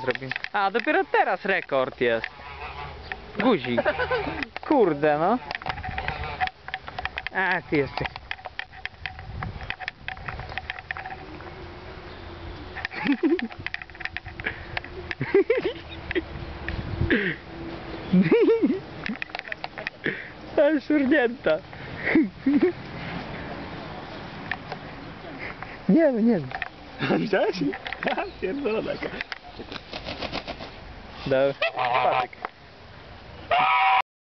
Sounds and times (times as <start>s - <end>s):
Honk: 2.2s - 4.5s, 5.3s - 6.6s, 31.6s - 32.4s, 33.5s - 34.0s.